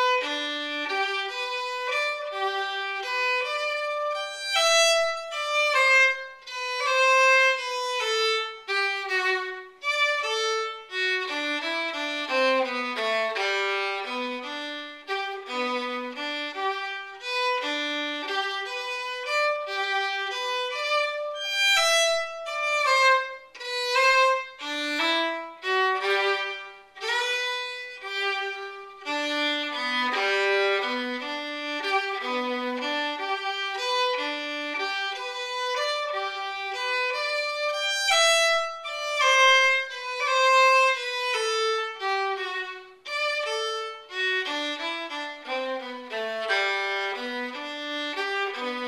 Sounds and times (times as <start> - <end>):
Violin, fiddle: 0.0 - 48.8.